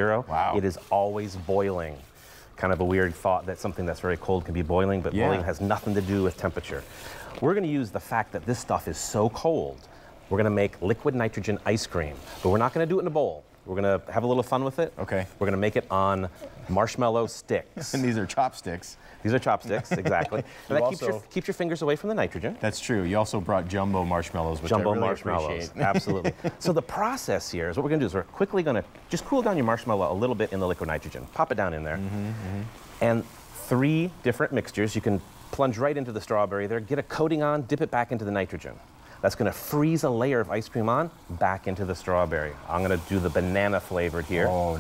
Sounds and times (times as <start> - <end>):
Speech: 2.6 - 6.8, 7.4 - 44.8.